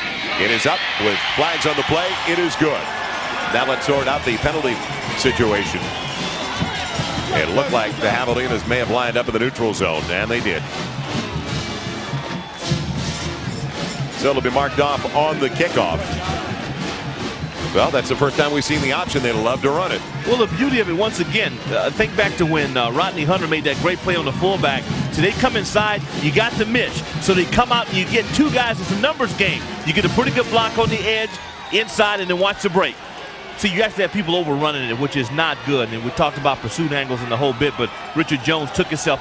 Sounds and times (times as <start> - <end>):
Music: 0.0 - 39.2
Speech: 0.3 - 2.9, 3.5 - 5.9, 7.3 - 10.7, 14.2 - 16.6, 17.7 - 33.0, 33.6 - 39.2.